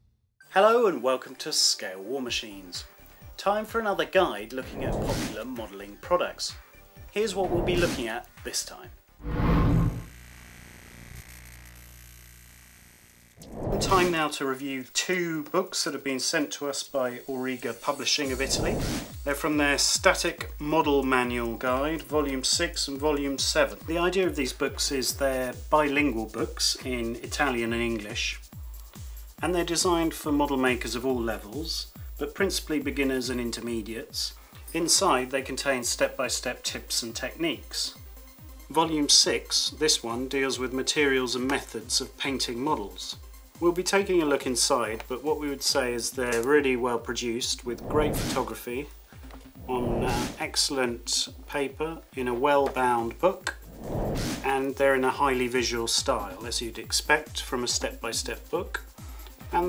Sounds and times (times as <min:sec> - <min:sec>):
Music: 0:00.4 - 0:09.5, 0:13.8 - 0:59.6
Speech: 0:00.5 - 0:08.9, 0:13.8 - 0:28.4, 0:29.4 - 0:38.0, 0:38.7 - 0:48.9, 0:49.7 - 0:53.6, 0:54.4 - 0:59.6.